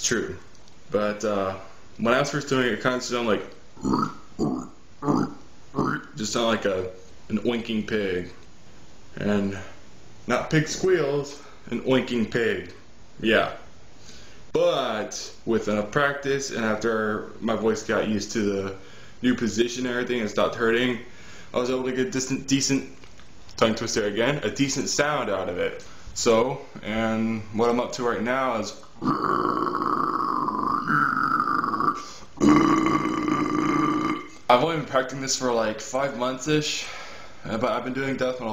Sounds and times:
Male speech, man speaking: 0:00.0 - 0:03.5, 0:05.8 - 0:08.4, 0:09.2 - 0:13.7, 0:14.6 - 0:23.0, 0:23.6 - 0:28.8, 0:34.5 - 0:38.5.

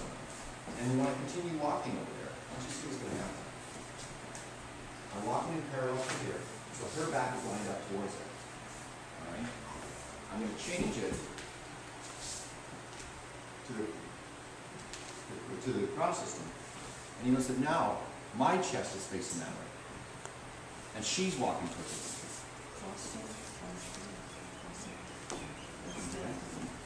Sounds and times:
Speech: 0:00.8 - 0:03.5, 0:10.3 - 0:11.4, 0:15.3 - 0:16.6, 0:17.2 - 0:19.8, 0:21.0 - 0:22.2.

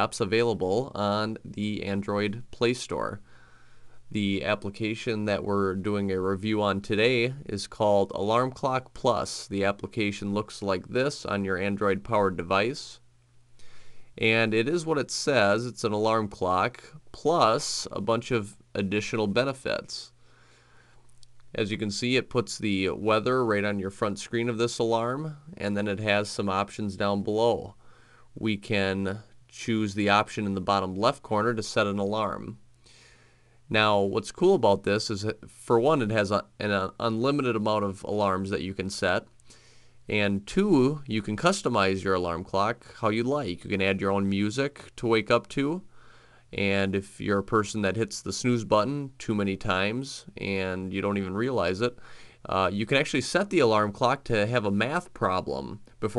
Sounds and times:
Speech: 0:00.0 - 0:03.3, 0:04.1 - 0:13.1, 0:14.2 - 0:20.2, 0:21.5 - 0:27.8, 0:28.4 - 0:32.6, 0:33.7 - 0:39.3, 0:40.1 - 0:45.9, 0:46.5 - 0:56.1.

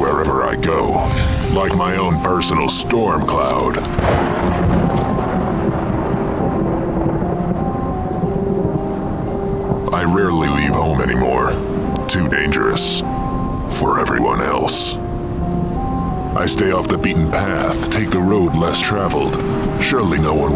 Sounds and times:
Speech: 0:00.0 - 0:03.9, 0:09.9 - 0:13.0, 0:13.7 - 0:15.0, 0:16.4 - 0:20.5
Music: 0:00.0 - 0:20.5
Outside, rural or natural: 0:00.0 - 0:20.5.

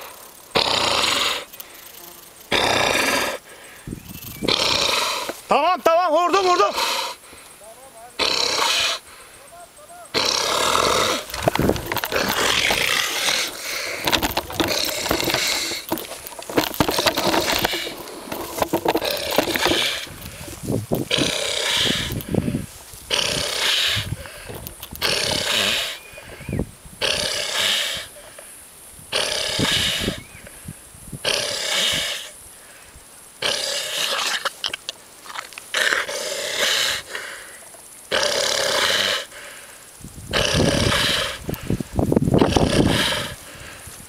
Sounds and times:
Pig: 0:08.2 - 0:09.0, 0:10.1 - 0:16.0, 0:33.4 - 0:34.8, 0:40.3 - 0:41.5, 0:42.4 - 0:43.4.

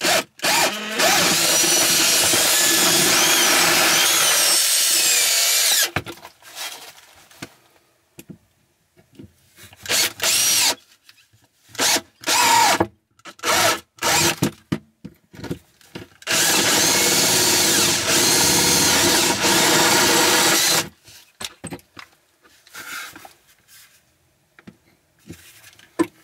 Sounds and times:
Drill: 0:00.0 - 0:06.0, 0:09.8 - 0:10.8, 0:11.8 - 0:14.4, 0:16.2 - 0:20.9
Wood: 0:00.4 - 0:07.5.

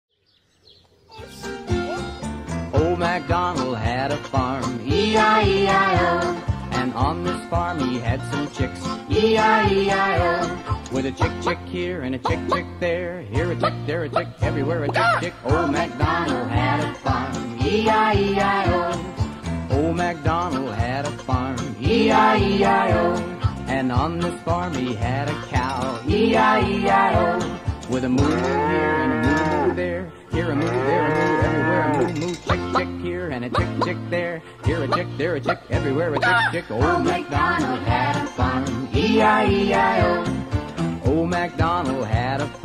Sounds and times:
Music: 0:01.1 - 0:42.6.

